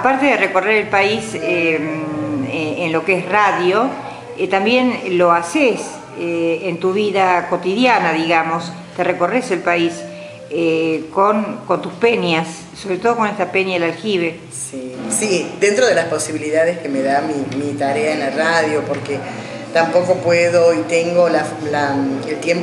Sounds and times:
Music: 0:00.0 - 0:22.6
Speech: 0:10.6 - 0:22.6.

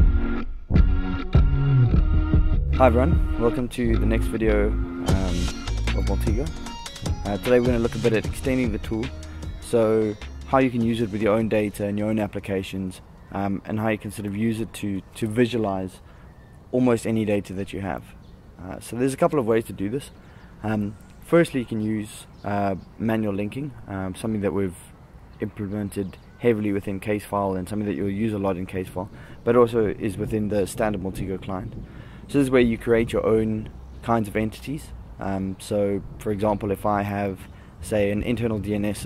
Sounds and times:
Speech: 0:02.8 - 0:06.6, 0:07.2 - 0:16.0, 0:16.7 - 0:39.0.

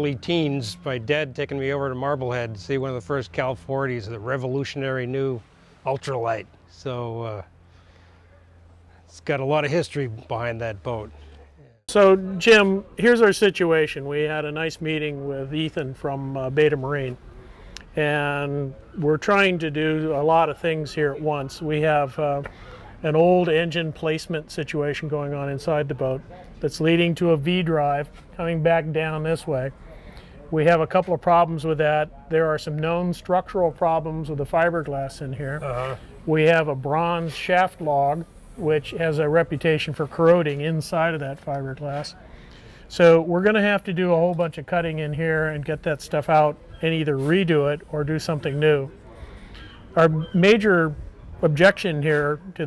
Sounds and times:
Speech: 0:00.0 - 0:07.5, 0:09.1 - 0:17.2, 0:17.9 - 0:42.3, 0:42.9 - 0:49.2, 0:50.0 - 0:52.6.

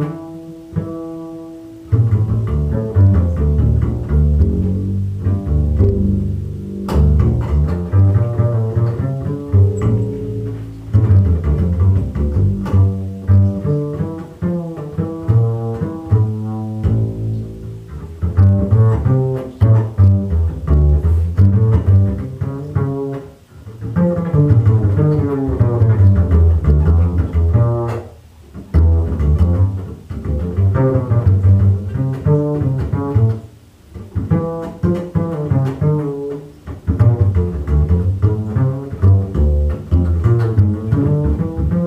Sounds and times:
Pizzicato: 0:00.0 - 0:41.8.

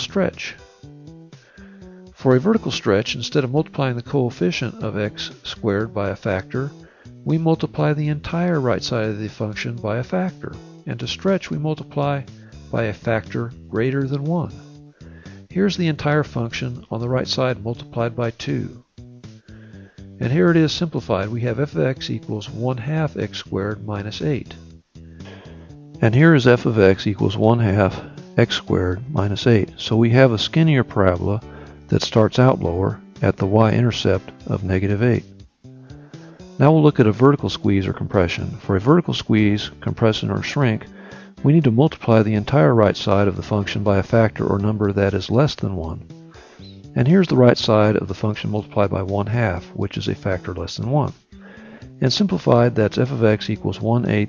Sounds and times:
Narration, monologue: 0:00.0 - 0:54.2.

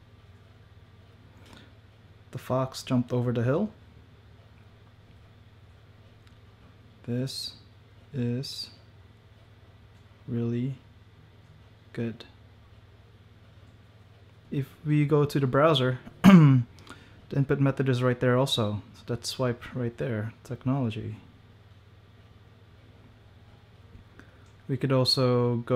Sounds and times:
Speech: 0:02.3 - 0:03.8, 0:07.0 - 0:08.8, 0:10.2 - 0:10.9, 0:11.9 - 0:12.4, 0:14.5 - 0:16.7, 0:17.3 - 0:21.3, 0:24.7 - 0:25.7.

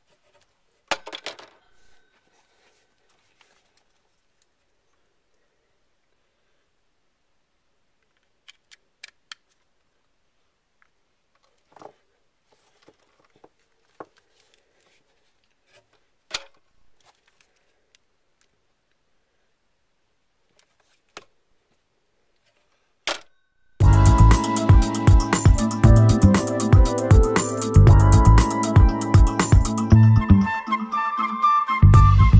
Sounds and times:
Inside, small room: 0:00.0 - 0:32.3.

